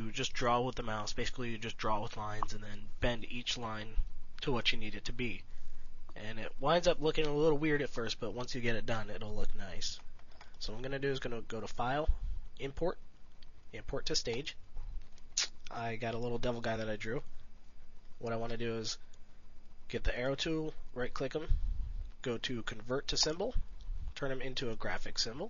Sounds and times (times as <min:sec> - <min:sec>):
Speech: 0:00.0 - 0:05.5, 0:06.2 - 0:10.0, 0:10.6 - 0:13.0, 0:13.7 - 0:14.6, 0:15.4 - 0:17.3, 0:18.2 - 0:19.0, 0:19.9 - 0:21.6, 0:22.2 - 0:23.6, 0:24.2 - 0:25.4.